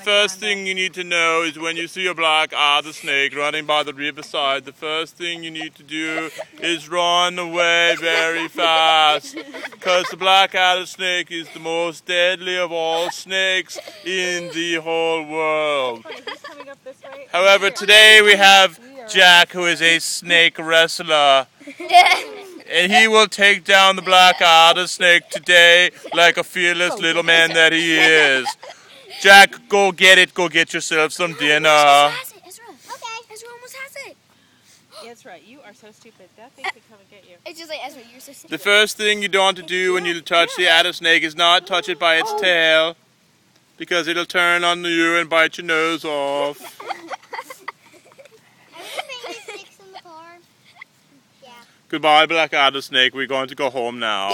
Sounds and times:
Speech: 0.0s - 21.5s, 22.7s - 28.6s, 35.0s - 43.0s
Outside, rural or natural: 0.0s - 54.3s.

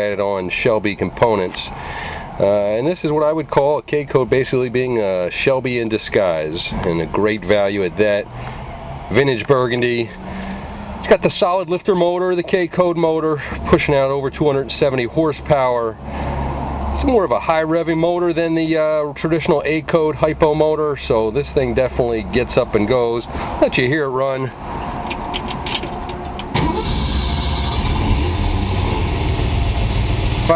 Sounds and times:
Speech: 0.0s - 1.8s, 2.4s - 8.3s, 9.1s - 10.2s, 11.0s - 16.0s, 17.0s - 24.6s.

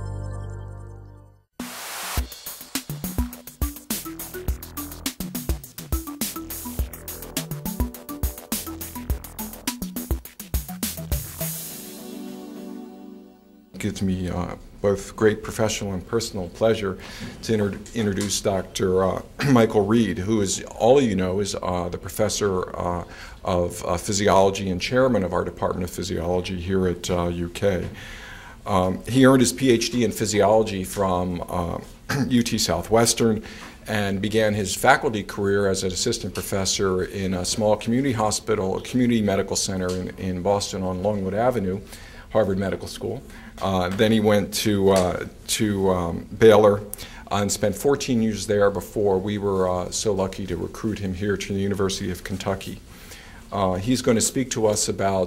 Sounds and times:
Music: 0.0s - 13.8s.

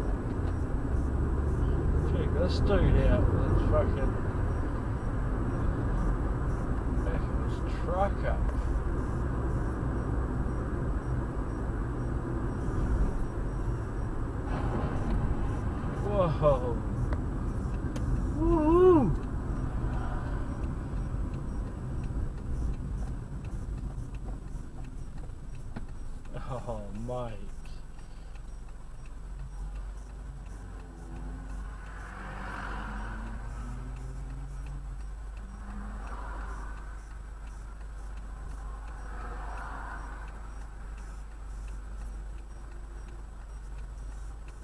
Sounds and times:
Car: 0.0s - 44.6s
Speech: 7.0s - 8.5s, 16.0s - 16.8s, 26.3s - 27.7s.

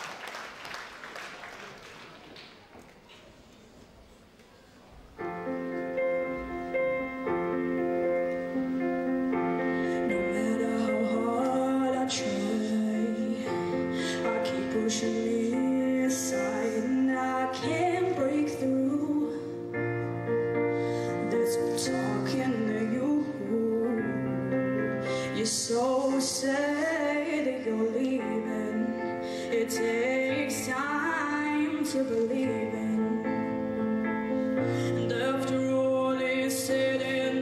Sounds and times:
Music: 5.0s - 37.4s
Female singing: 10.1s - 19.7s, 21.2s - 24.6s, 25.4s - 33.5s, 35.1s - 37.4s.

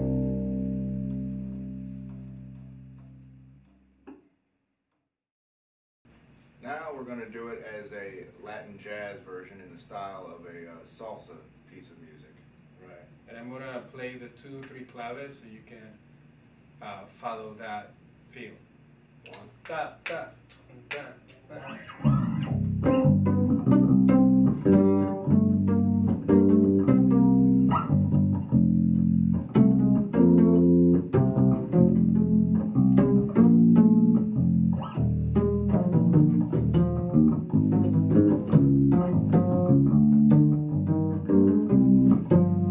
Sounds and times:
Bass guitar: 0.0s - 4.0s, 21.5s - 42.7s
Inside, small room: 0.0s - 5.2s, 6.1s - 42.7s
Bowed string instrument: 22.1s - 42.7s.

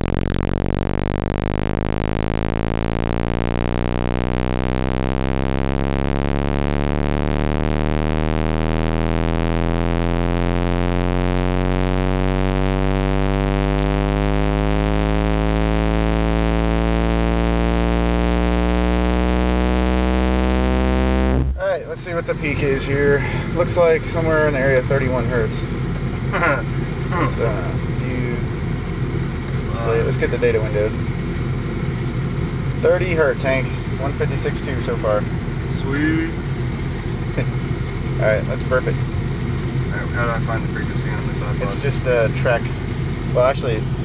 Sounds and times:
Speech: 21.6s - 25.7s, 26.4s - 28.5s, 29.6s - 31.0s, 32.8s - 36.4s, 38.2s - 39.0s, 39.9s - 43.9s.

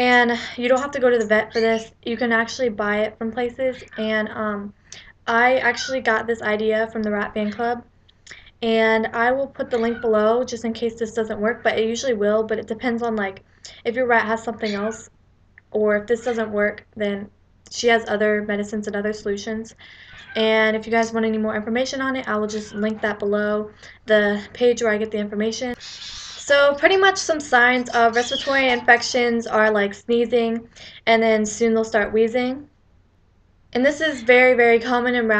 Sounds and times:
Speech: 0.0s - 25.8s, 26.4s - 32.7s, 33.8s - 35.3s.

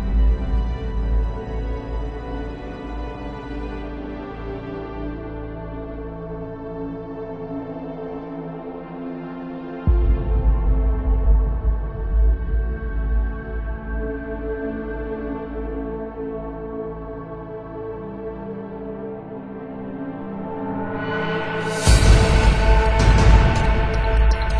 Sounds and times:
Tender music: 0.0s - 24.5s.

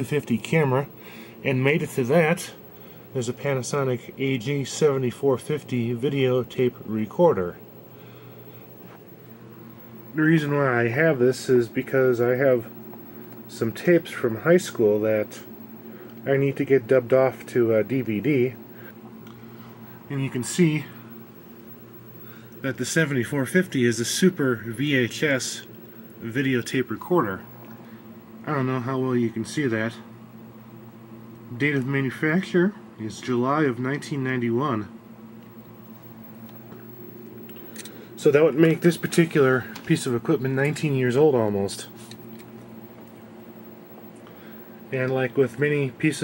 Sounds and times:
Speech: 0.0s - 7.6s, 10.1s - 12.8s, 13.5s - 15.5s, 16.2s - 18.6s, 20.1s - 21.1s, 22.6s - 27.5s, 28.4s - 30.1s, 31.5s - 35.0s, 38.2s - 42.1s, 44.9s - 46.2s.

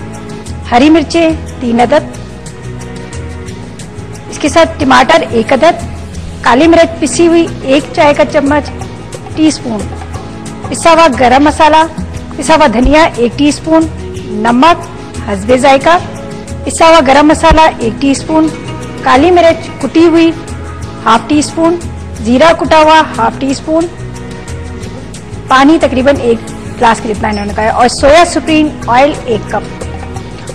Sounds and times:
Music: 0.0s - 30.5s
Speech: 25.5s - 29.7s.

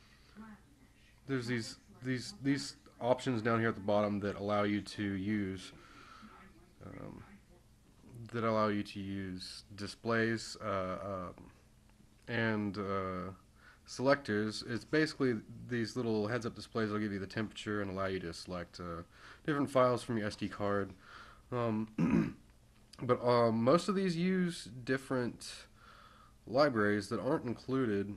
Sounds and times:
Speech: 0.3s - 11.6s, 12.3s - 22.4s, 23.0s - 25.7s, 26.5s - 28.1s.

